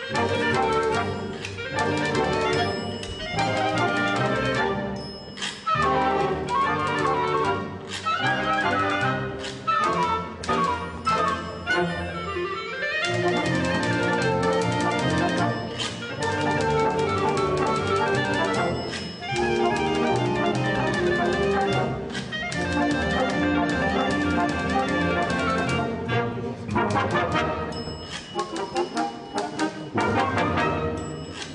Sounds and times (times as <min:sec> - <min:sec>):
Musical instrument: 0:00.0 - 0:31.5.